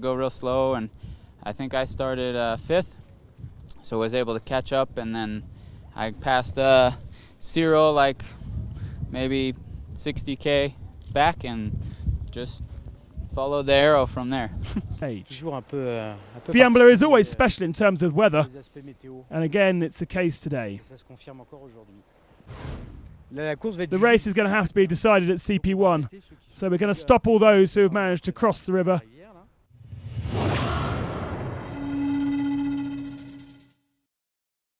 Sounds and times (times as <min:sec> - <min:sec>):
Speech: 0:00.0 - 0:02.9, 0:06.0 - 0:08.2, 0:09.2 - 0:11.7, 0:13.3 - 0:22.0, 0:23.3 - 0:29.5.